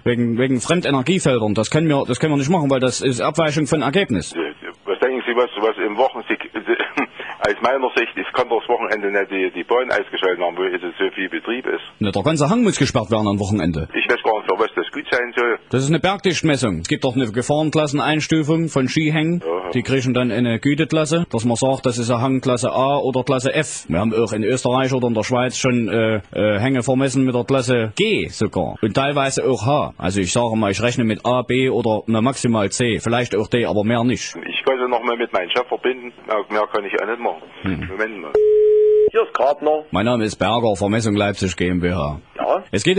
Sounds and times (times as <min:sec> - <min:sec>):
Speech: 0:00.0 - 0:38.4, 0:39.1 - 0:42.9.